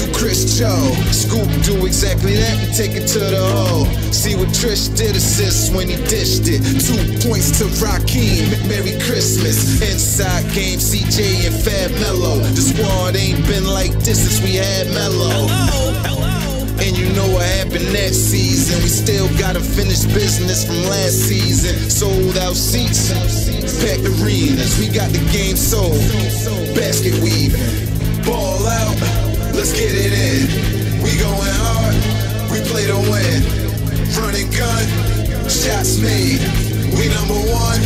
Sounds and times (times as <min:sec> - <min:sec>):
Rapping: 0:00.0 - 0:37.8.